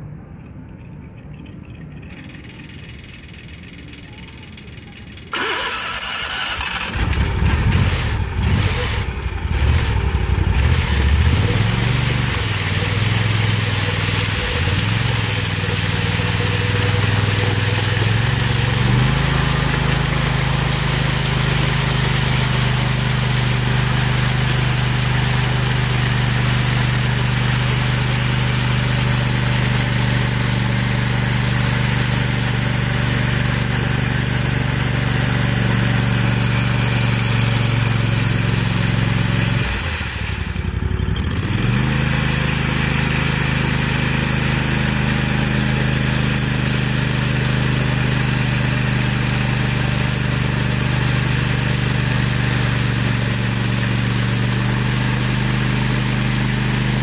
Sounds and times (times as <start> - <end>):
Engine: 0.0 - 57.0
Outside, urban or manmade: 0.0 - 57.0
Vibration: 0.6 - 48.1.